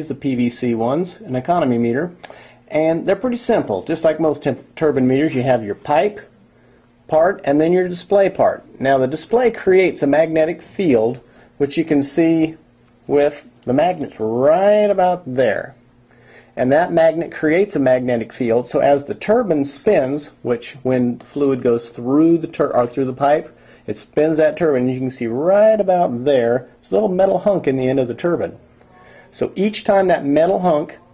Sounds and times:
Speech: 0.0 - 6.4, 7.1 - 15.8, 16.6 - 31.1.

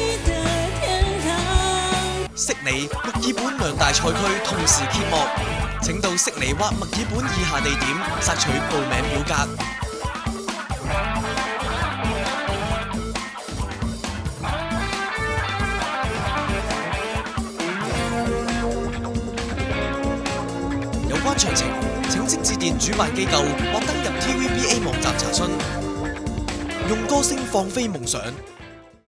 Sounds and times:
Music: 0.0 - 29.0
Speech: 2.4 - 9.6, 21.1 - 25.8, 26.8 - 28.4.

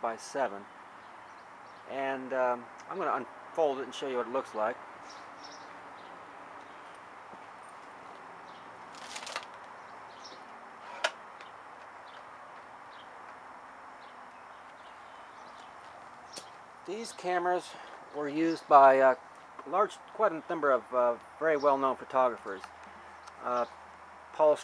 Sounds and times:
Speech: 0.0 - 0.7, 1.9 - 4.8, 16.9 - 22.7, 23.4 - 23.7, 24.4 - 24.6.

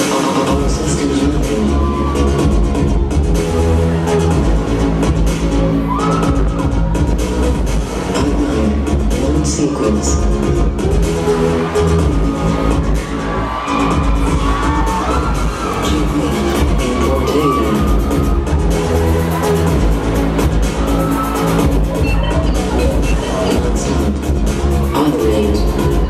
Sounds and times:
Music: 0.0 - 26.1.

